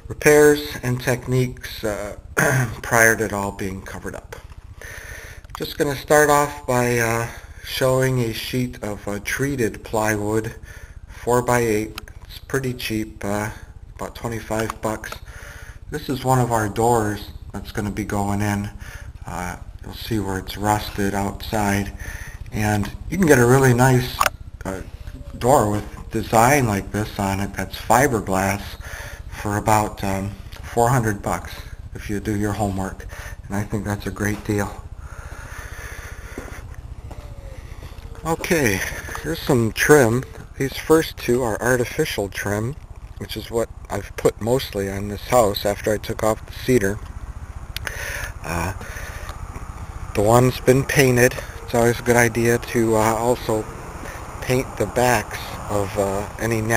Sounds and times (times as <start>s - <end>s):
Speech: 0.0s - 4.4s, 5.6s - 10.6s, 11.2s - 15.3s, 15.9s - 34.8s, 38.2s - 47.0s, 48.3s - 49.0s, 50.1s - 53.7s, 54.4s - 56.7s.